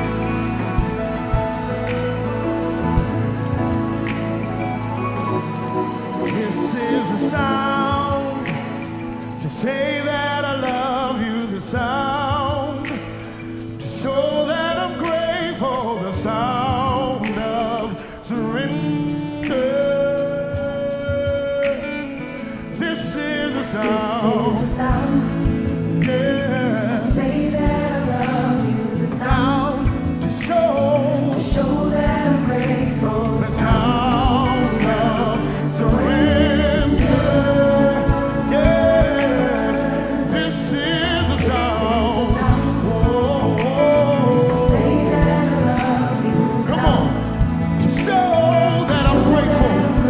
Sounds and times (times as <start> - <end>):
Music: 0.0 - 50.1.